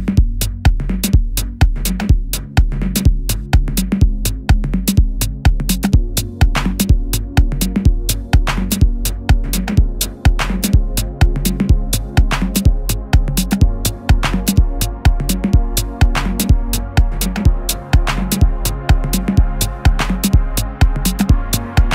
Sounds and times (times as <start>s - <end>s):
Music: 0.0s - 21.9s.